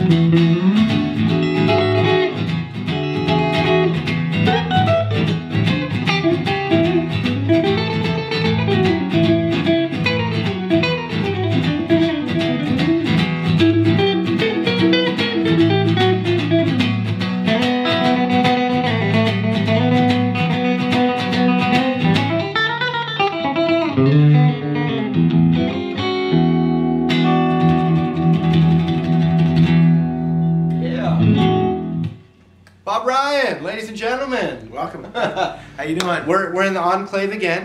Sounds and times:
Strum: 0.0s - 22.6s.

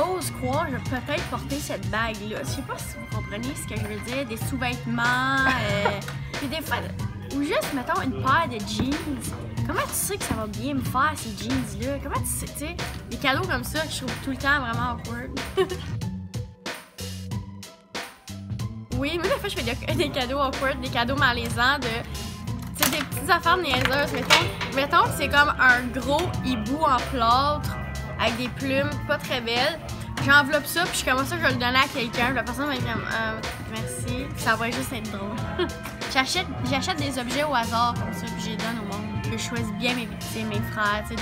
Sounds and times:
Speech: 0.0s - 15.8s, 18.9s - 22.1s, 22.7s - 35.4s, 36.1s - 41.2s
Music: 0.0s - 41.2s.

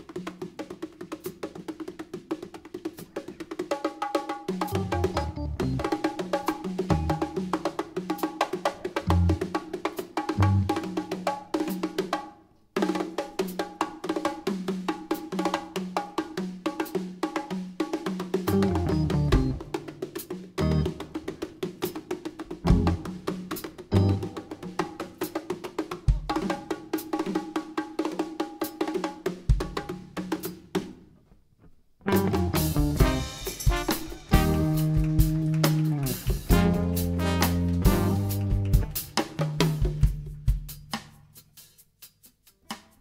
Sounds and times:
Orchestra: 32.1s - 39.2s
Inside, large room or hall: 32.5s - 41.8s.

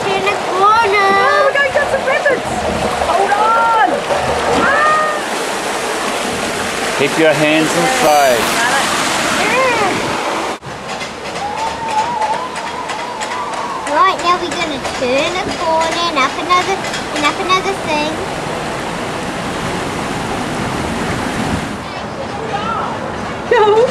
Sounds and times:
Outside, rural or natural: 0.0s - 23.9s.

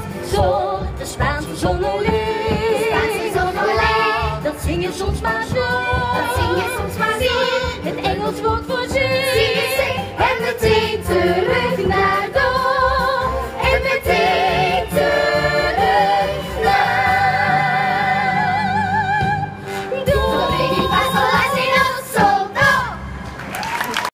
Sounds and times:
Exciting music: 0.0s - 23.2s.

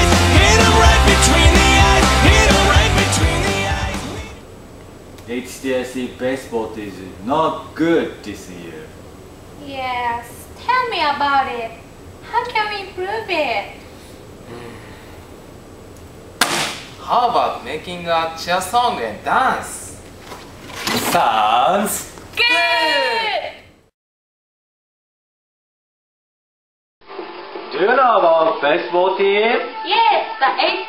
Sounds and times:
Shout: 22.4s - 23.7s, 29.6s - 30.8s.

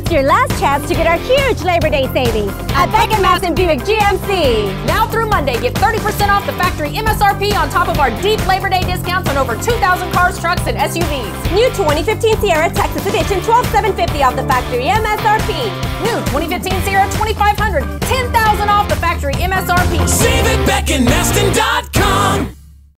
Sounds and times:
Speech: 0.0s - 20.3s
Music: 0.0s - 22.9s.

